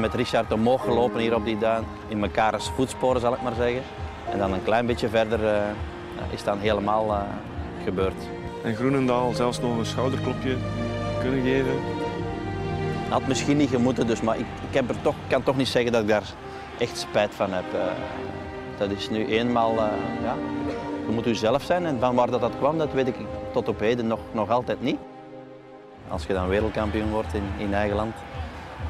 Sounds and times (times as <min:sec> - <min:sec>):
Music: 0:00.0 - 0:28.9.